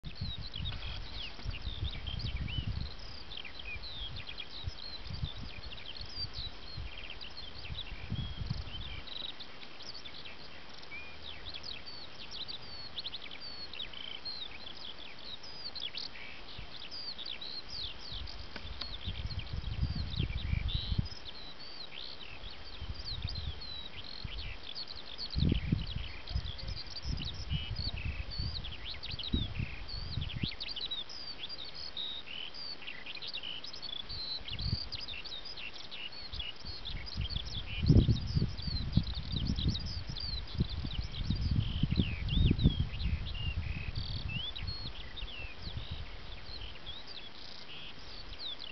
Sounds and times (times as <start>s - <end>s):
Bird vocalization, bird call, bird song: 0.0s - 48.7s.